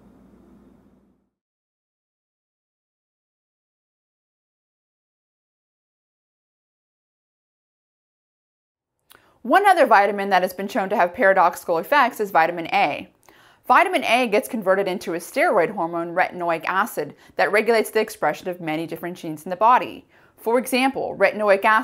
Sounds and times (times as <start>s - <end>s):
Speech: 9.5s - 13.1s, 13.7s - 21.8s.